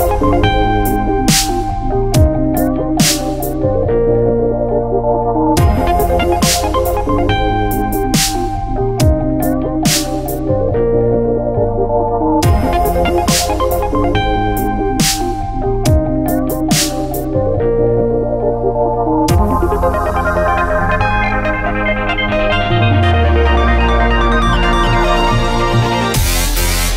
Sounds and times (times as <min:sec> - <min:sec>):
Music: 0:00.0 - 0:26.9.